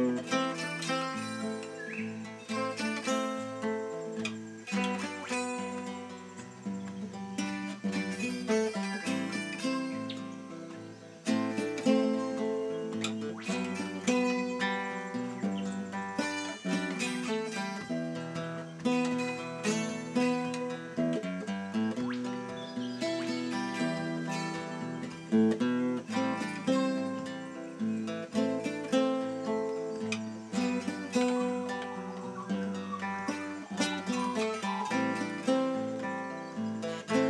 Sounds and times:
Music: 0.0s - 37.2s.

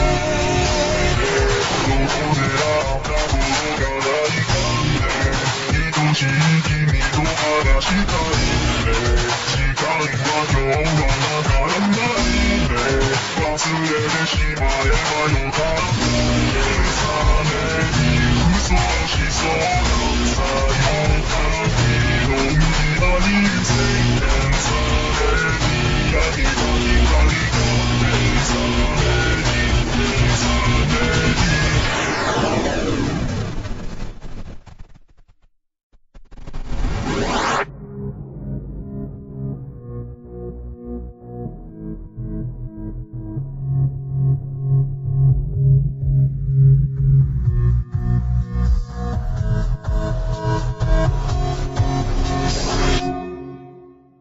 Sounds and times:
Electronica: 0.0s - 34.9s, 36.2s - 54.0s.

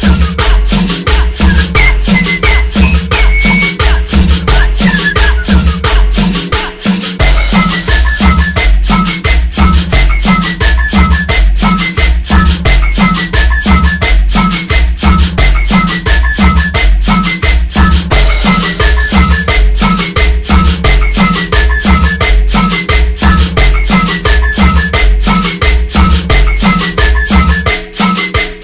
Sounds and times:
Music: 0.0s - 28.6s.

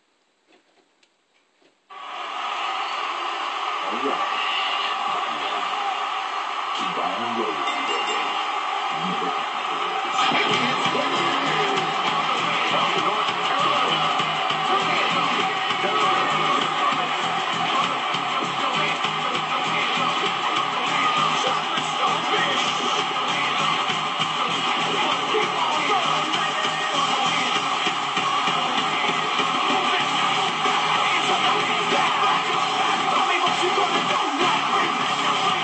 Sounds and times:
Speech: 3.8s - 4.4s, 6.8s - 8.1s, 10.2s - 17.2s
Music: 10.1s - 35.6s.

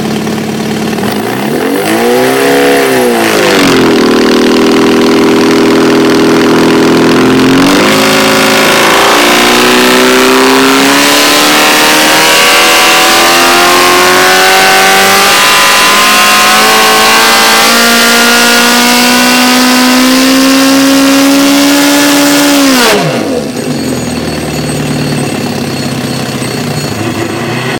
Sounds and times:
Vehicle: 0.0s - 27.7s
Accelerating, revving, vroom: 1.0s - 23.6s.

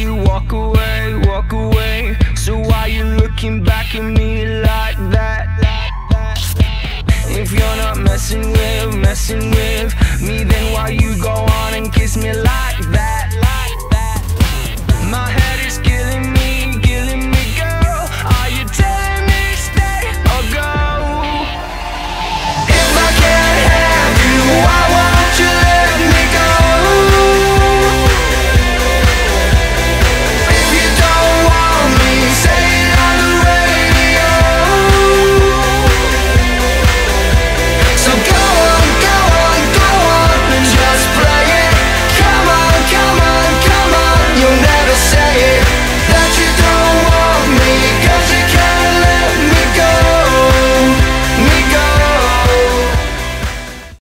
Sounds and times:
Music: 0.0s - 54.0s.

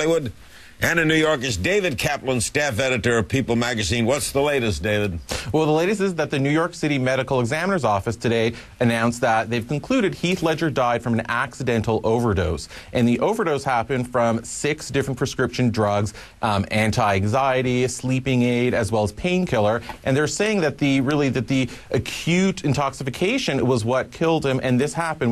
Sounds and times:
Speech: 0.0s - 25.3s.

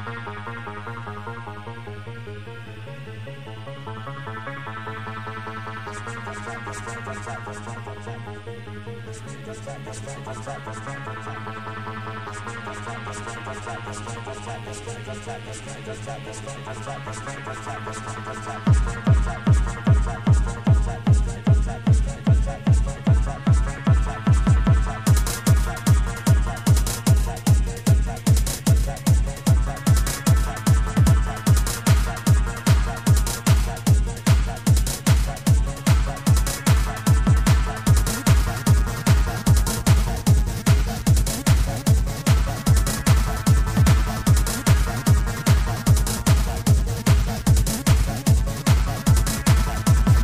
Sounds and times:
Music: 0.0s - 50.2s.

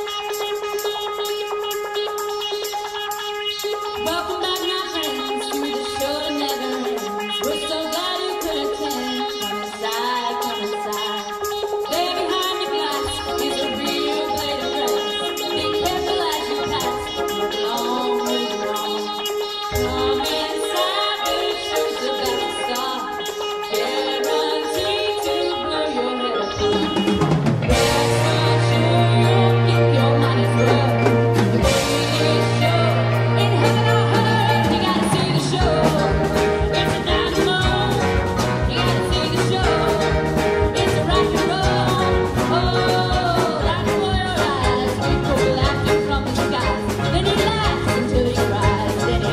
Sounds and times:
Marimba, xylophone: 3.6s - 49.3s.

